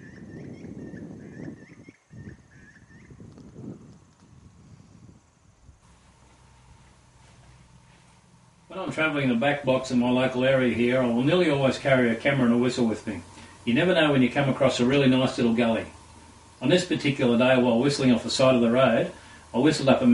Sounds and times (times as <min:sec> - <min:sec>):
Speech: 0:08.7 - 0:16.0, 0:16.6 - 0:20.1.